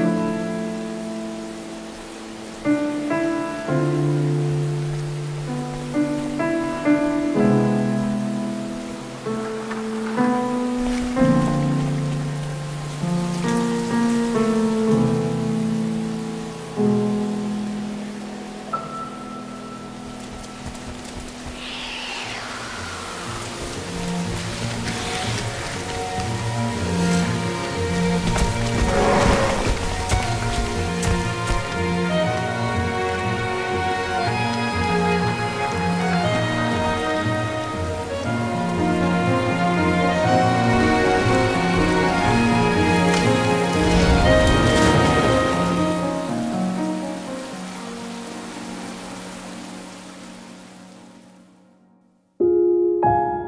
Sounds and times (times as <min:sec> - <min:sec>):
Rain on surface: 0:00.0 - 0:51.8
Music: 0:00.0 - 0:53.4.